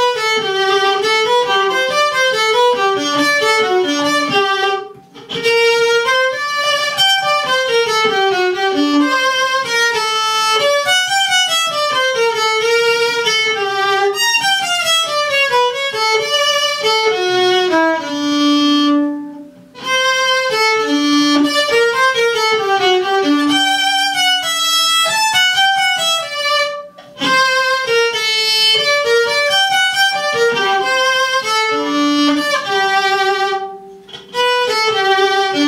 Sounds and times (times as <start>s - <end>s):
Violin, fiddle: 0.0s - 35.6s.